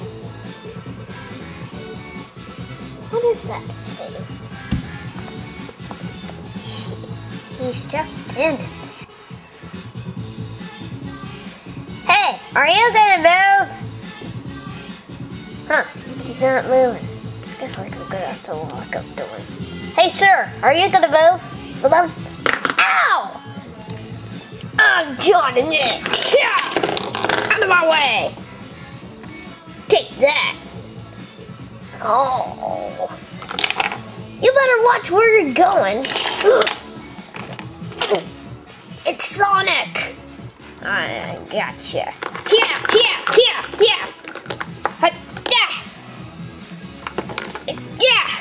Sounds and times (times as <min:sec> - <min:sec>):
Music: 0:00.0 - 0:48.4.